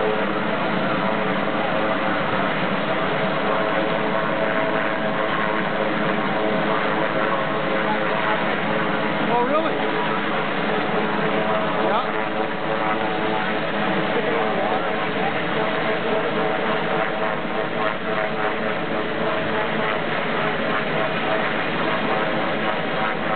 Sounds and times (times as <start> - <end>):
Helicopter: 0.0 - 23.3
Speech: 9.3 - 9.8, 11.8 - 12.2.